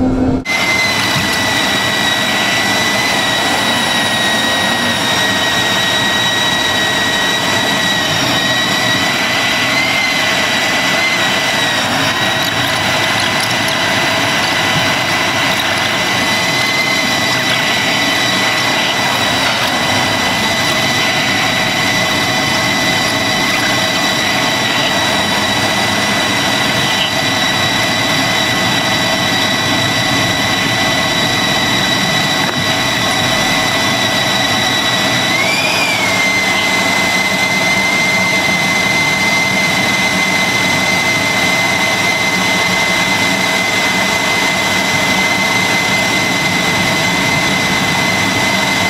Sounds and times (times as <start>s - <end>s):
Fixed-wing aircraft, airplane: 0.0s - 48.9s.